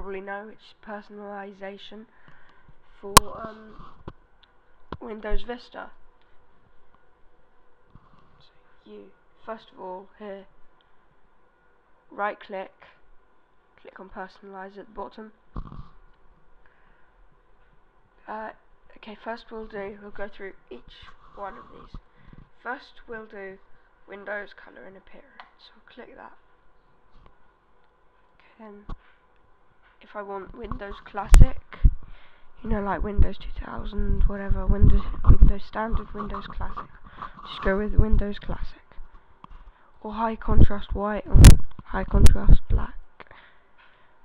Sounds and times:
Speech: 0.0s - 2.2s, 3.0s - 3.9s, 5.0s - 6.0s, 8.4s - 10.5s, 12.1s - 13.0s, 13.8s - 15.4s, 18.2s - 22.0s, 22.6s - 26.5s, 28.4s - 29.0s, 30.0s - 31.8s, 32.6s - 39.0s, 40.0s - 43.0s.

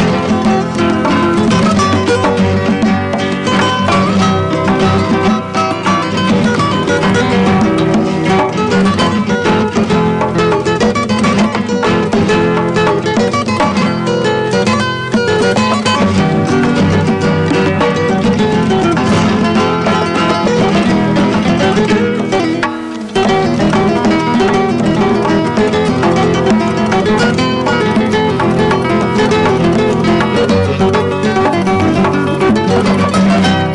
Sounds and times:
Music of Latin America: 0.0s - 33.7s.

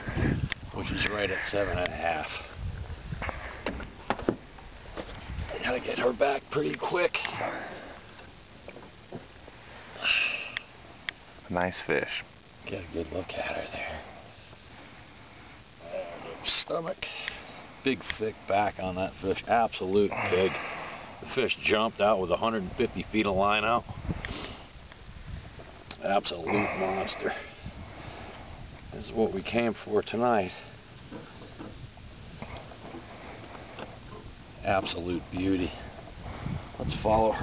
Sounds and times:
Speech: 0.7s - 2.5s, 5.5s - 7.4s, 11.5s - 14.1s, 15.8s - 17.2s, 17.8s - 20.6s, 21.2s - 23.9s, 26.0s - 27.5s, 28.9s - 30.7s, 34.6s - 35.8s, 36.8s - 37.4s.

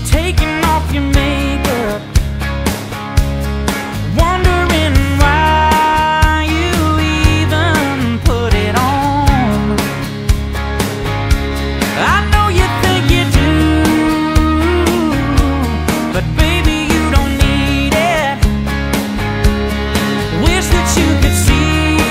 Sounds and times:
Music: 0.0s - 22.1s.

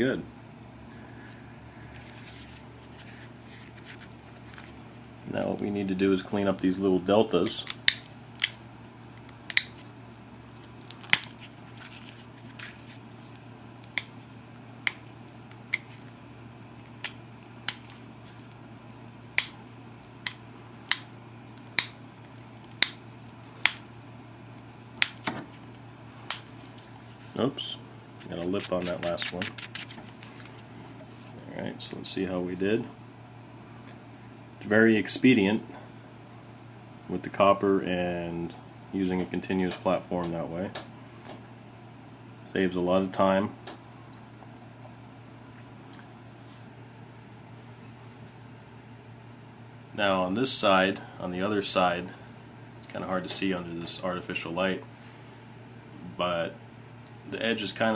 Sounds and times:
Speech: 0.0s - 0.3s, 5.2s - 7.7s, 27.3s - 29.5s, 31.4s - 33.0s, 34.6s - 35.7s, 37.1s - 40.8s, 42.5s - 43.6s, 50.0s - 52.2s, 52.8s - 54.8s, 56.1s - 56.6s, 57.3s - 57.9s.

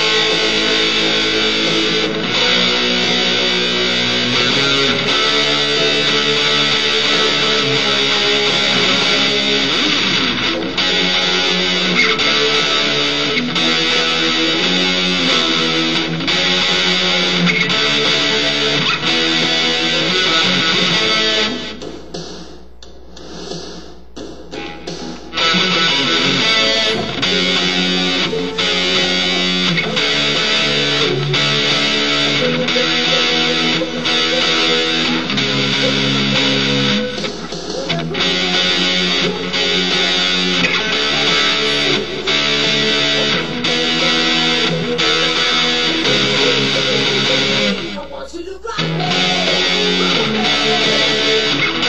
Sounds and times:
Electric guitar: 0.0s - 22.4s, 24.5s - 51.8s.

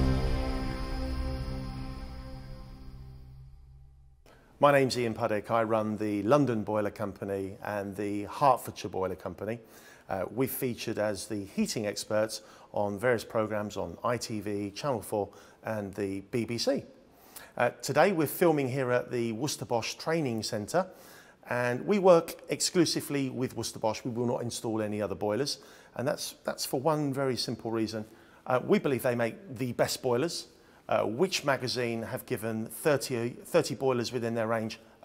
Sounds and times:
Speech: 4.6s - 17.0s, 17.6s - 20.9s, 21.5s - 35.0s.

